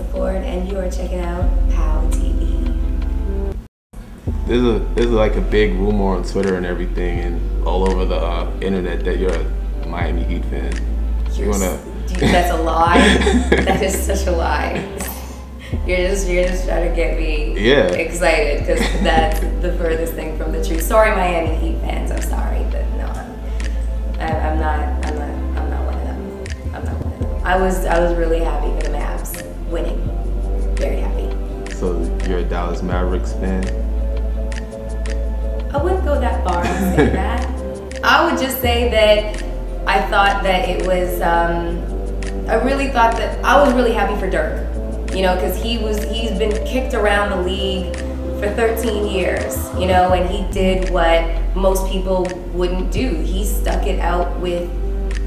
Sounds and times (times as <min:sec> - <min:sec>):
Speech: 0:00.0 - 0:02.6, 0:04.4 - 0:23.4, 0:24.2 - 0:30.0, 0:30.8 - 0:33.8, 0:35.7 - 0:41.8, 0:42.5 - 0:54.7
Music: 0:00.0 - 0:55.2.